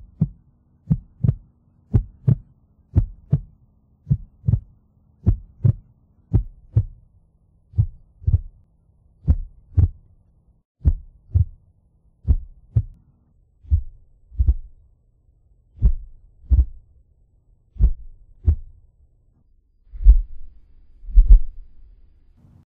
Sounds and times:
Heart sounds, heartbeat: 0.0s - 3.5s, 4.1s - 7.0s, 7.8s - 8.6s, 9.2s - 10.0s, 10.8s - 11.6s, 12.2s - 13.0s, 13.7s - 14.8s, 15.8s - 16.9s, 17.8s - 18.8s, 20.0s - 20.5s, 21.1s - 21.6s.

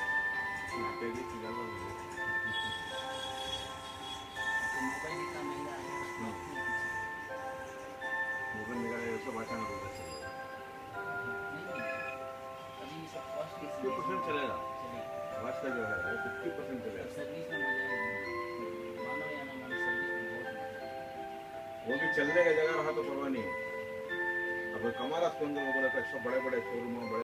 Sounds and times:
Music: 0.0s - 27.2s.

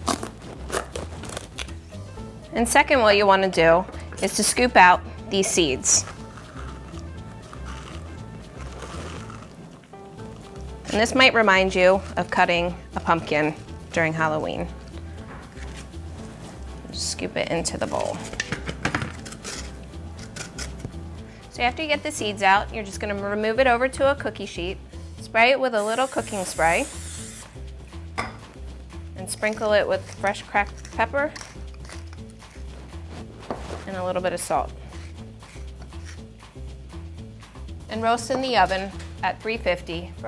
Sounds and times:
Music: 0.0s - 40.2s
Speech: 17.0s - 18.2s, 29.2s - 31.4s, 37.9s - 40.2s.

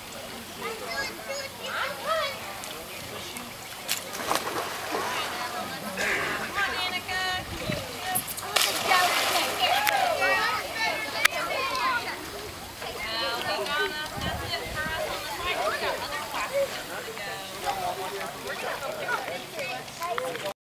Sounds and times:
Speech: 5.0s - 20.6s.

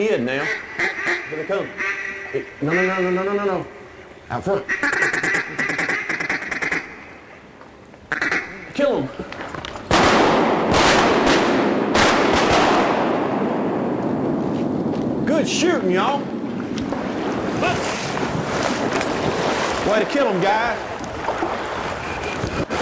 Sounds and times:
Duck: 0.4s - 3.4s, 4.6s - 6.9s, 8.1s - 8.6s
Speech: 8.6s - 9.2s, 15.3s - 16.3s, 19.8s - 20.8s.

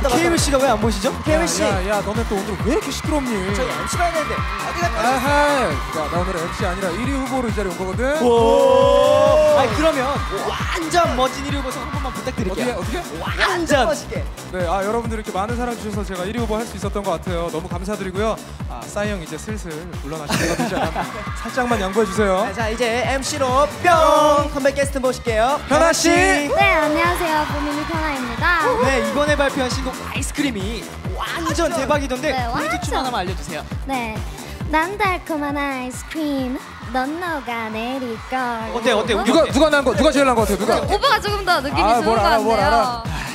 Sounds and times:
Music: 0.0s - 43.3s.

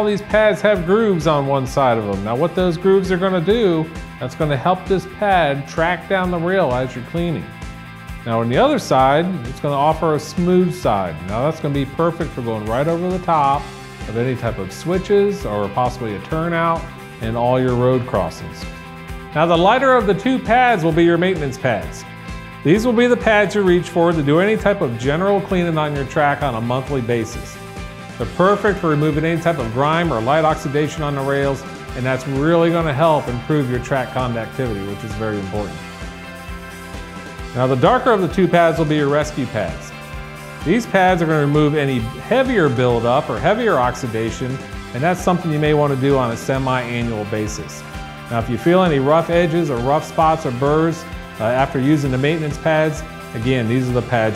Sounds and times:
Speech: 0.0s - 7.5s, 8.2s - 18.7s, 19.4s - 22.0s, 22.6s - 27.6s, 28.2s - 35.8s, 37.6s - 40.0s, 40.6s - 54.3s
Music: 0.0s - 54.3s.

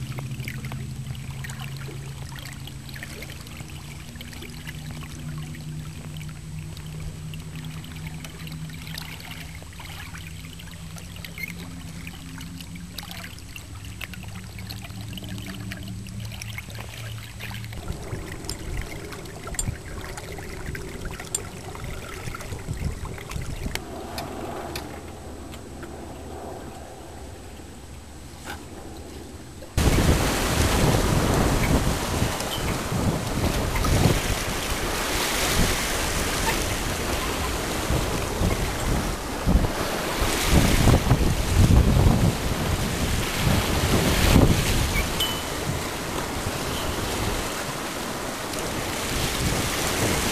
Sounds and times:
Sailboat, sailing ship: 0.0s - 50.3s.

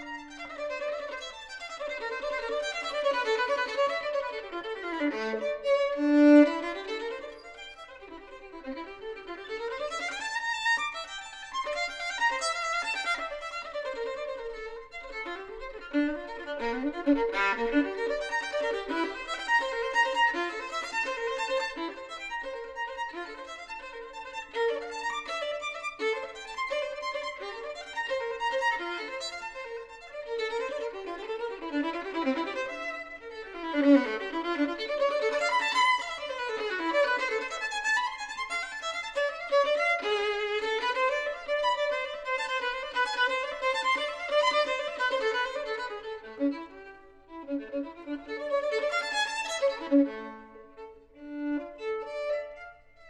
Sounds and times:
Violin, fiddle: 0.0s - 53.0s.

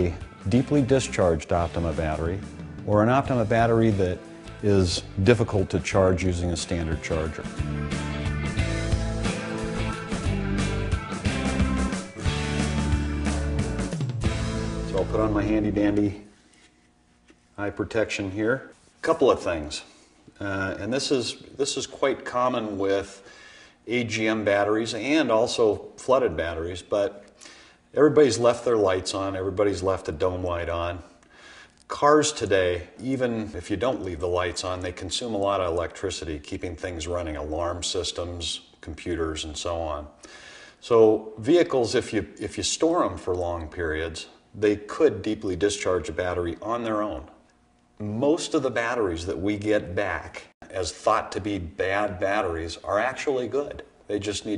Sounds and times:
Speech: 0.0s - 7.6s, 14.9s - 16.3s, 17.6s - 23.2s, 23.9s - 27.2s, 27.9s - 31.1s, 31.9s - 40.2s, 40.8s - 47.4s, 48.0s - 54.5s
Music: 0.0s - 16.3s.

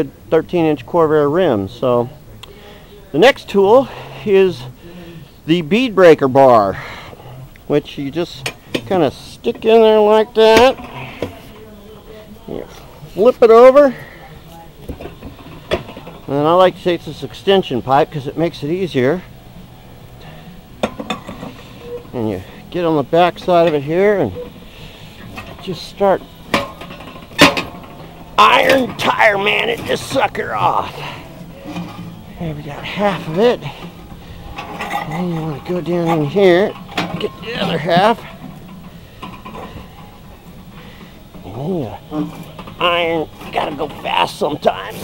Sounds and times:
Speech: 0.0s - 4.7s, 5.5s - 6.8s, 7.7s - 14.7s, 16.3s - 19.3s, 22.1s - 24.4s, 25.6s - 26.2s, 28.4s - 31.1s, 32.4s - 33.8s, 34.9s - 38.3s, 41.4s - 45.0s.

